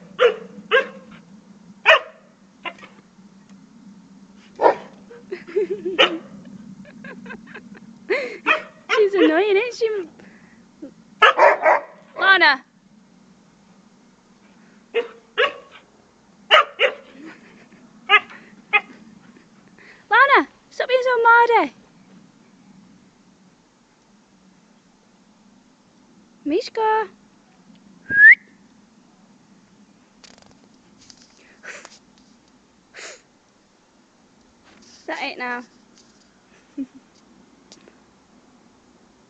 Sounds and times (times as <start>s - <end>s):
Dog: 0.2s - 1.2s, 1.9s - 3.0s, 4.6s - 5.0s, 6.0s - 6.3s, 8.5s - 9.4s, 11.2s - 12.0s, 15.0s - 15.8s, 16.5s - 17.2s
Speech: 8.9s - 10.1s, 12.2s - 12.7s, 20.1s - 21.8s, 26.5s - 27.2s, 35.0s - 35.7s.